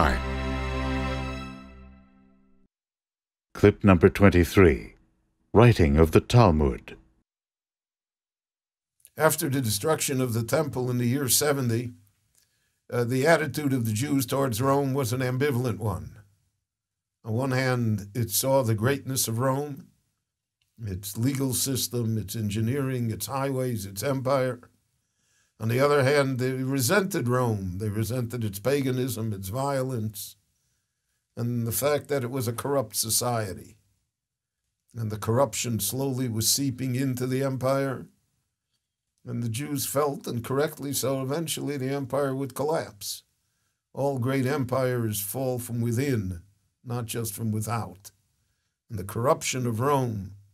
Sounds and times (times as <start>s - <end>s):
Speech: 0.0s - 0.3s, 3.6s - 4.9s, 5.6s - 7.0s, 9.2s - 12.0s, 12.9s - 16.2s, 17.3s - 19.8s, 20.8s - 24.6s, 25.6s - 30.4s, 31.4s - 33.7s, 35.0s - 38.1s, 39.3s - 43.2s, 44.0s - 48.1s, 48.9s - 50.4s.